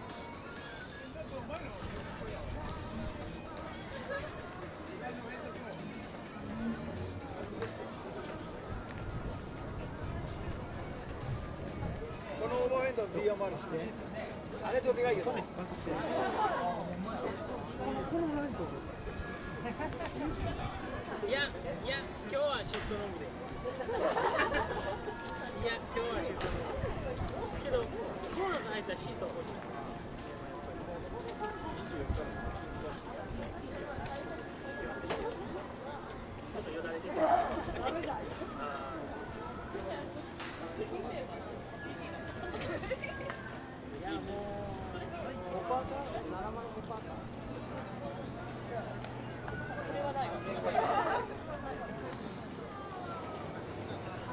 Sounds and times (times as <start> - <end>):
Music: 0.0 - 54.3.